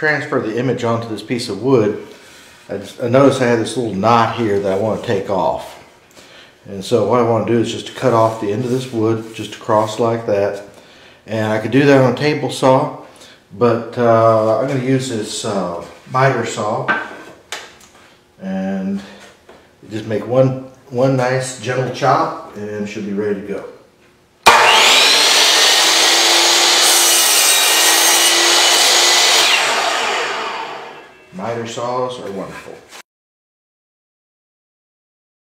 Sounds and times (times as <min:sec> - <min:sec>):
Power tool: 0:24.4 - 0:31.2.